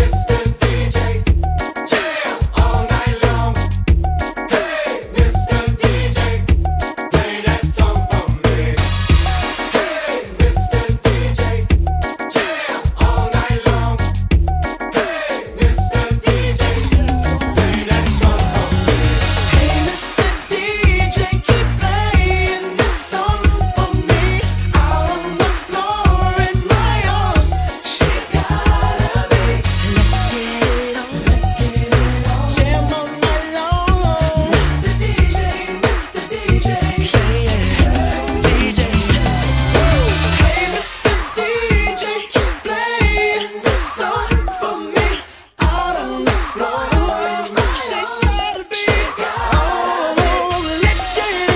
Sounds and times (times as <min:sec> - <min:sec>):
Singing: 0:00.0 - 0:03.7, 0:04.5 - 0:14.1, 0:14.9 - 0:51.5
Exciting music: 0:01.2 - 0:13.9, 0:14.6 - 0:51.5.